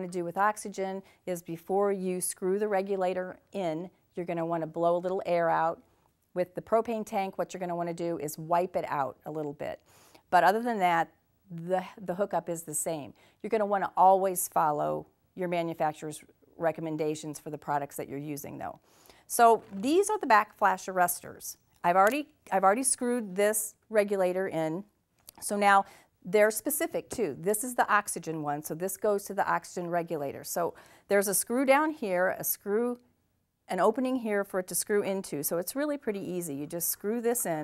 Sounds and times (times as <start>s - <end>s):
Speech: 0.0s - 5.8s, 10.4s - 33.0s, 33.7s - 37.6s.